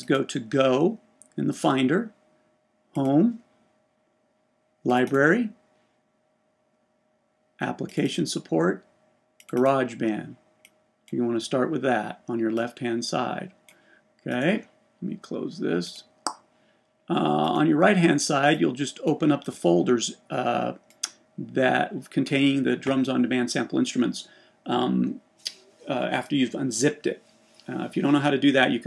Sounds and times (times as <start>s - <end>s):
Speech: 0.0s - 2.2s, 3.0s - 3.5s, 4.9s - 5.6s, 7.6s - 8.9s, 9.5s - 10.4s, 11.1s - 13.6s, 14.3s - 16.1s, 17.1s - 20.8s, 21.4s - 28.8s.